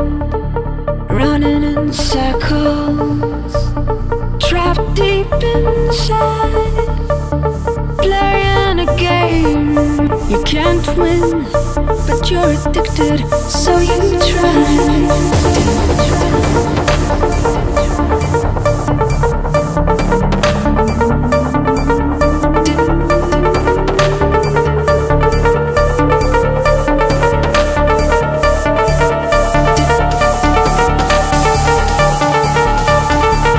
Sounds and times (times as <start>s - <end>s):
Trance music: 0.0s - 33.5s.